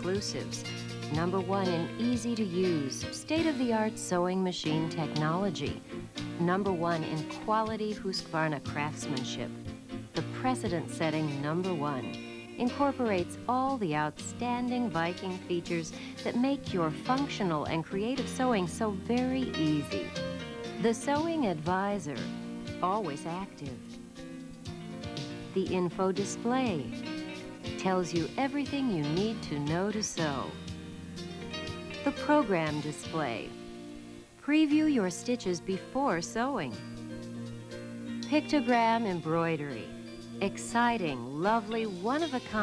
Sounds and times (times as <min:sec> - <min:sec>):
Speech: 0:00.0 - 0:05.8, 0:06.4 - 0:09.5, 0:10.2 - 0:20.2, 0:20.8 - 0:23.8, 0:25.5 - 0:27.0, 0:27.8 - 0:30.6, 0:32.1 - 0:33.5, 0:34.4 - 0:36.8, 0:38.3 - 0:42.6
Music: 0:00.0 - 0:42.6.